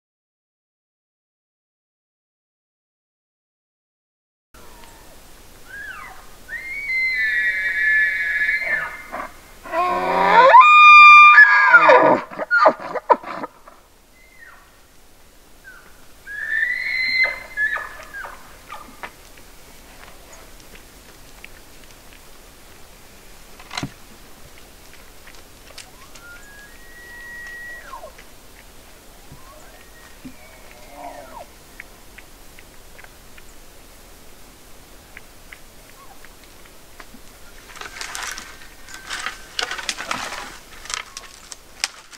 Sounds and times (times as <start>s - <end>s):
Animal: 4.6s - 14.7s, 15.7s - 19.1s, 24.5s - 33.1s, 35.9s - 36.3s
Outside, rural or natural: 4.6s - 42.1s.